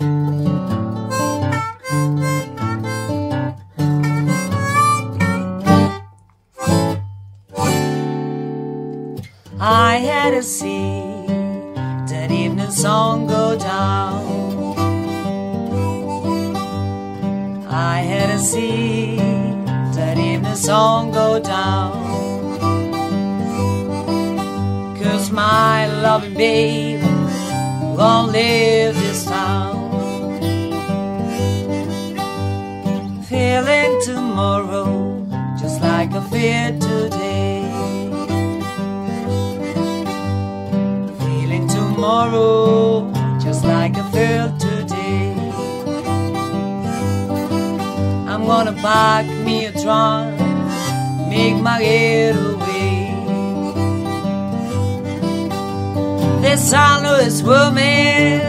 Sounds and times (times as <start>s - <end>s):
Acoustic guitar: 0.0s - 58.4s.